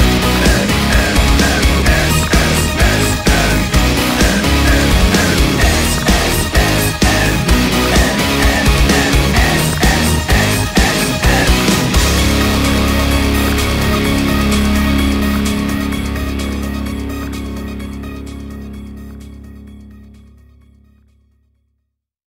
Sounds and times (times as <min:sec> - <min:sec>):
Heavy metal: 0:00.0 - 0:20.4.